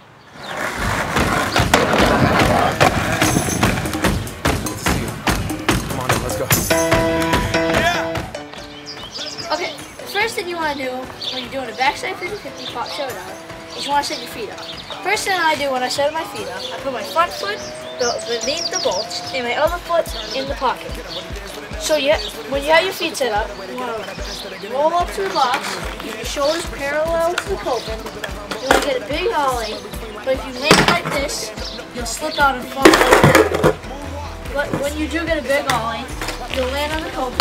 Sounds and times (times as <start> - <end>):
Music: 1.1 - 37.4
Speech: 5.9 - 6.6, 9.2 - 33.1, 33.8 - 37.4.